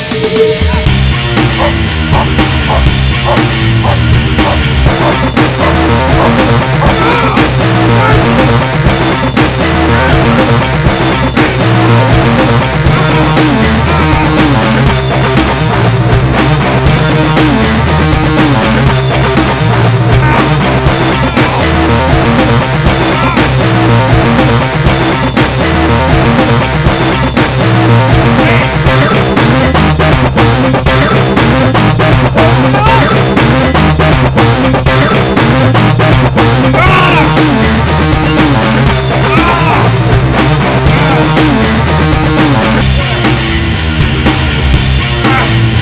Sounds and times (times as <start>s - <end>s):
Music: 0.0s - 45.8s.